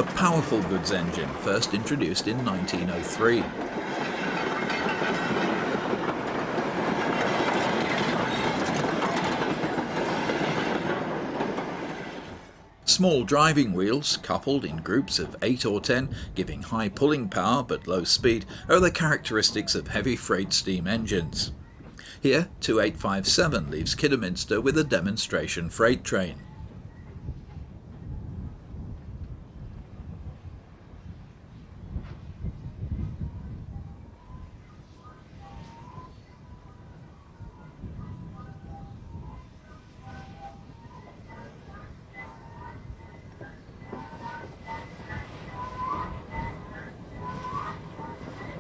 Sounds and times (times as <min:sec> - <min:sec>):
Speech: 0:00.0 - 0:03.6, 0:12.9 - 0:21.6, 0:22.2 - 0:26.4
Railroad car, train wagon: 0:00.0 - 0:48.6
Train: 0:00.0 - 0:48.6.